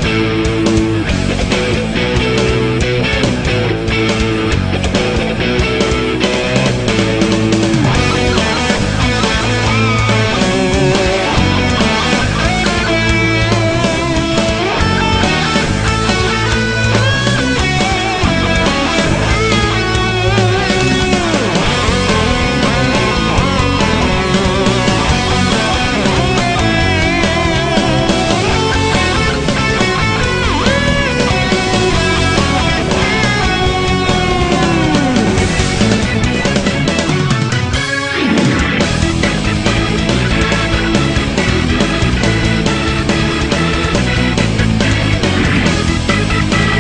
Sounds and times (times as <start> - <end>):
Techno: 0.0 - 46.8.